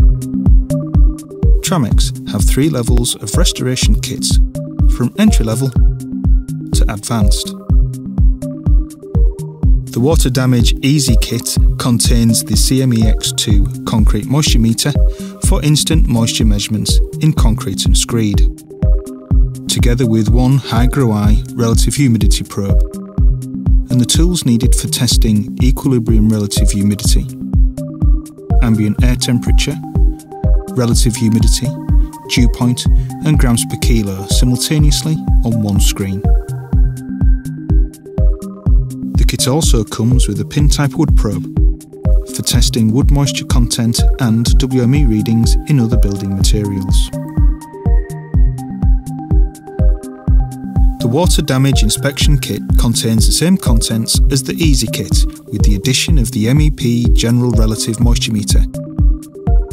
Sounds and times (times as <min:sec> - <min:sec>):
Music: 0:00.0 - 0:59.7
Speech: 0:01.6 - 0:05.8, 0:06.8 - 0:07.6, 0:09.9 - 0:18.5, 0:19.7 - 0:22.9, 0:23.9 - 0:27.4, 0:28.6 - 0:29.9, 0:30.7 - 0:36.3, 0:39.2 - 0:41.5, 0:42.3 - 0:47.2, 0:51.0 - 0:58.7.